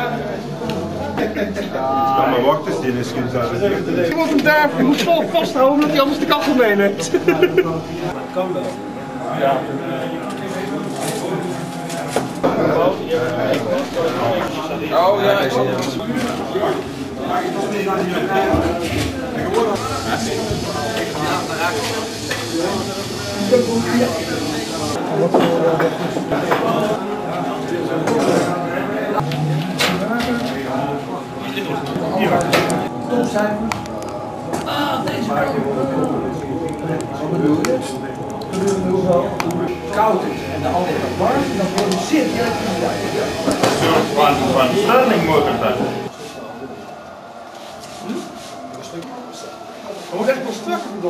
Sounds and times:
Speech: 0.0s - 29.2s, 29.8s - 33.9s, 34.6s - 47.0s, 48.0s - 51.0s.

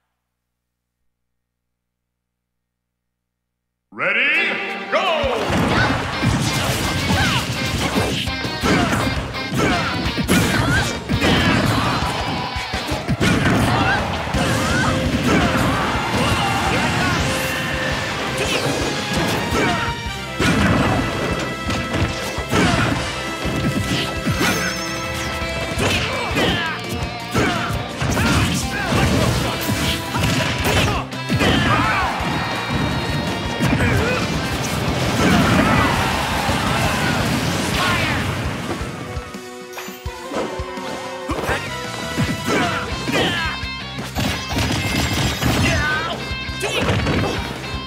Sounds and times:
Music: 4.0s - 47.8s
Smash, crash: 5.3s - 39.3s, 41.3s - 47.6s.

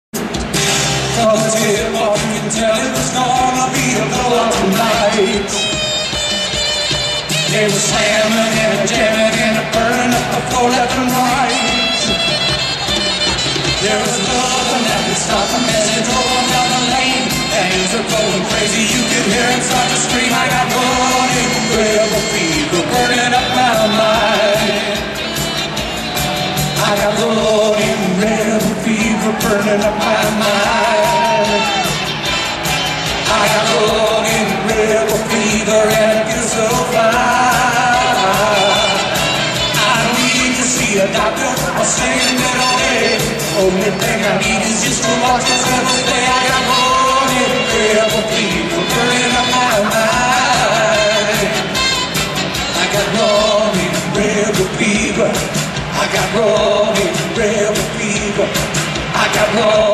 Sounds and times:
Inside, public space: 0.0s - 59.9s
Music: 0.1s - 59.9s.

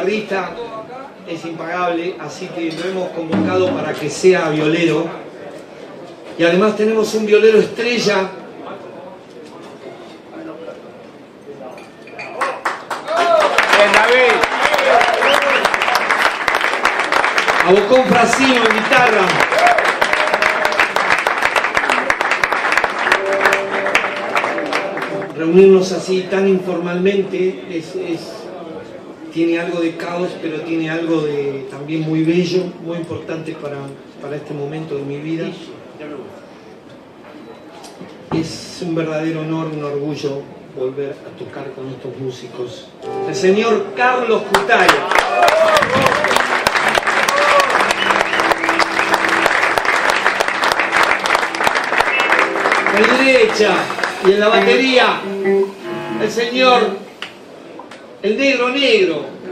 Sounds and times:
Speech: 0.0s - 5.6s, 13.1s - 14.8s, 17.6s - 19.4s, 25.4s - 36.4s, 37.7s - 45.1s, 52.9s - 55.2s.

